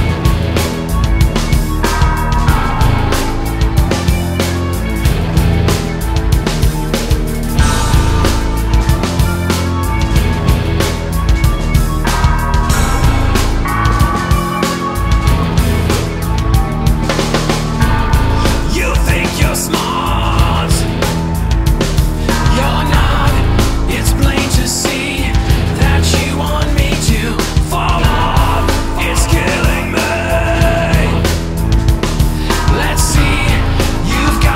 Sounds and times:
Music: 0.0 - 34.5.

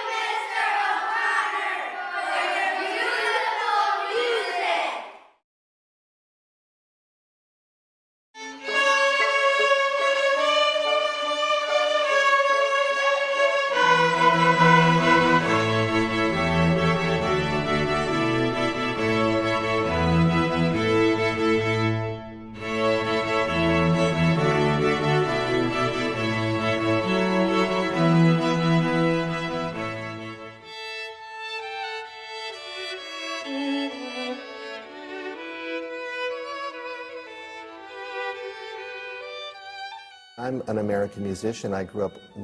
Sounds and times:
Violin, fiddle: 8.4 - 42.4.

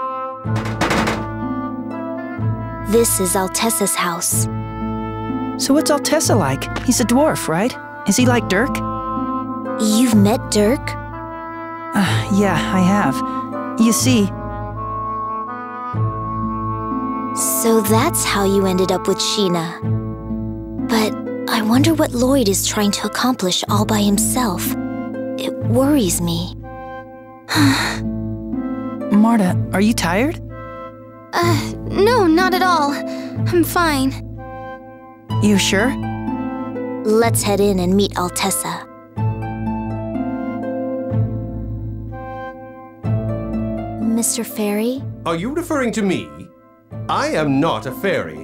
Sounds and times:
Music: 0.0 - 48.4
Speech: 17.4 - 19.8, 20.9 - 24.8, 25.4 - 26.6, 31.4 - 34.2, 35.4 - 36.0, 37.1 - 38.8, 44.1 - 46.5, 47.1 - 48.4.

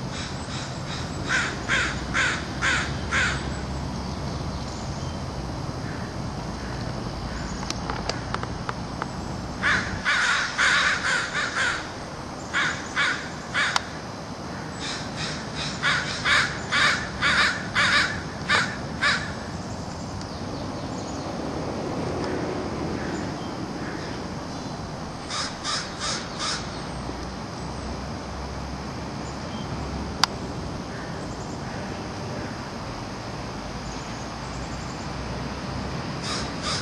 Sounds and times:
Caw: 0.1 - 3.5, 5.8 - 8.3, 9.6 - 19.5, 23.0 - 24.2, 25.3 - 26.8, 30.9 - 32.6, 36.2 - 36.8.

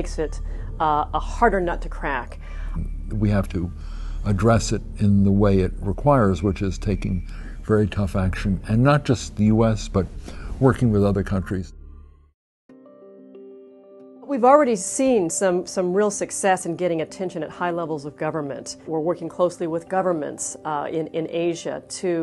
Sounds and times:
Speech: 0.0 - 3.7, 4.3 - 11.7, 14.3 - 22.2
Music: 0.0 - 22.2.

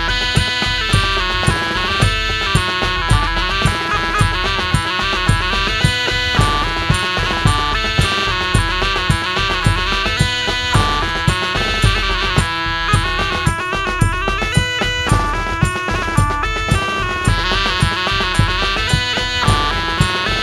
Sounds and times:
Bagpipes: 0.0 - 20.4.

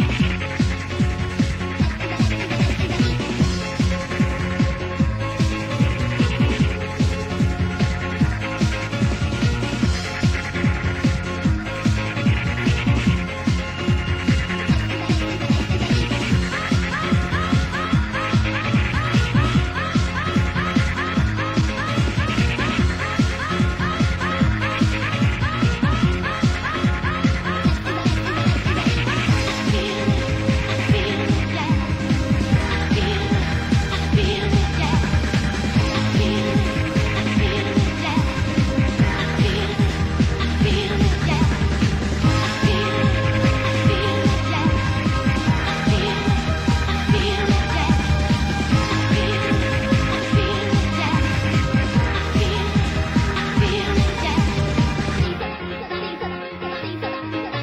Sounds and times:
Electronic dance music: 0.0 - 57.6
House music: 0.0 - 57.6
Techno: 0.0 - 57.6
Trance music: 0.0 - 57.6.

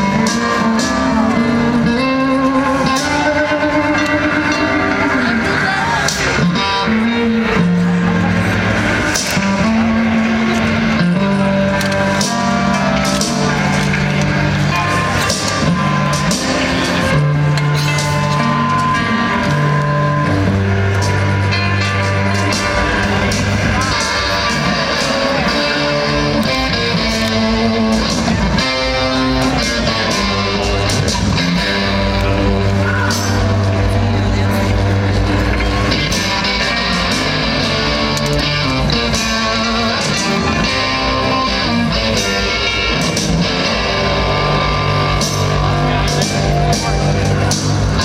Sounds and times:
Music: 0.0 - 48.0.

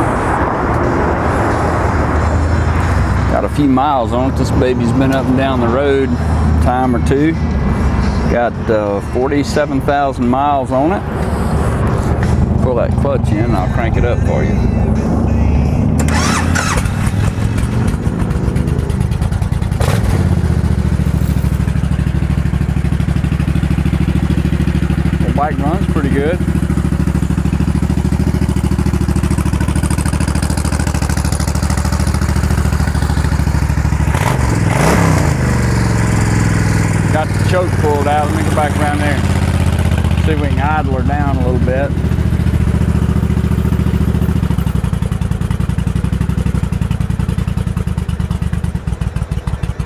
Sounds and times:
Motorcycle: 0.0 - 49.8.

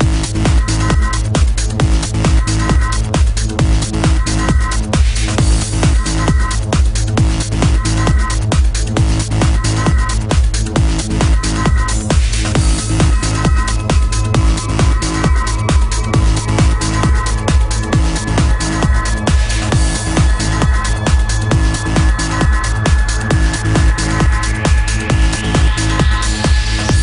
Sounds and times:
Trance music: 0.0 - 27.0.

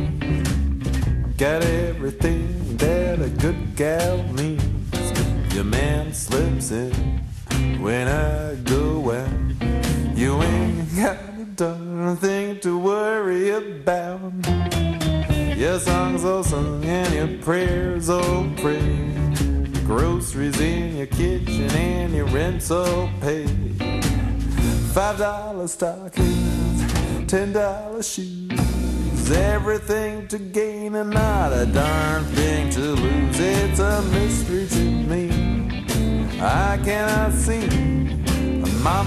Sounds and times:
Music: 0.0 - 39.0.

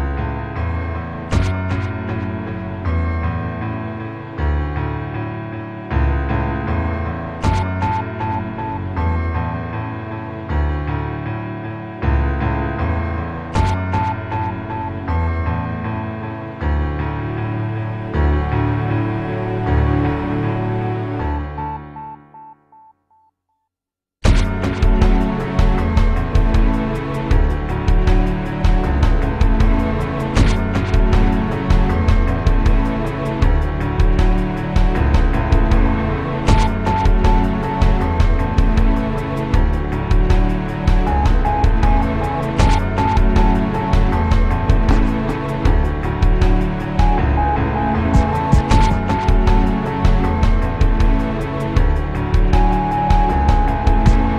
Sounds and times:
Music: 0.0 - 23.3, 24.2 - 54.3.

